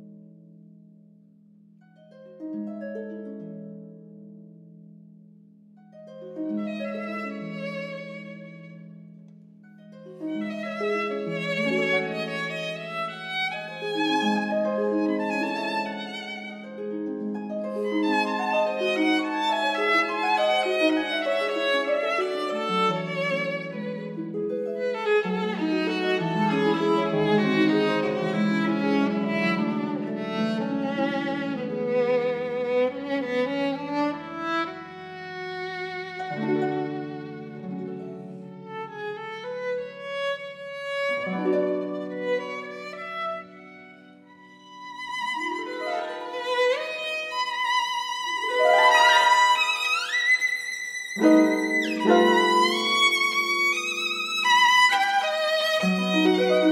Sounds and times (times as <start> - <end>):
Cello: 6.3 - 56.7
Violin, fiddle: 6.6 - 8.8, 10.2 - 16.7, 17.8 - 56.7.